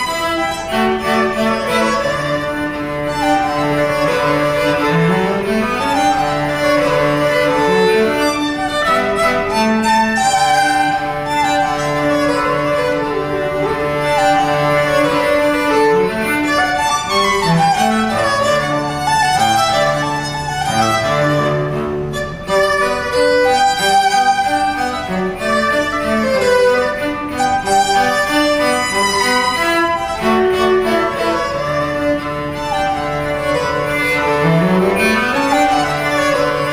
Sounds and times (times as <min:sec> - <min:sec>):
Cello: 0:00.0 - 0:36.7
Violin, fiddle: 0:00.0 - 0:36.7.